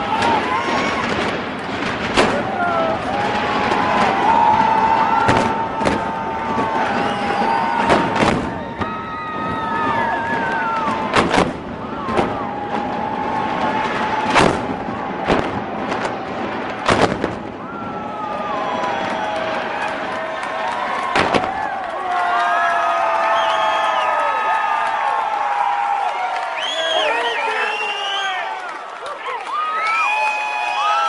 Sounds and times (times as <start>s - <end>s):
Explosion: 0.0s - 19.9s, 21.0s - 21.9s.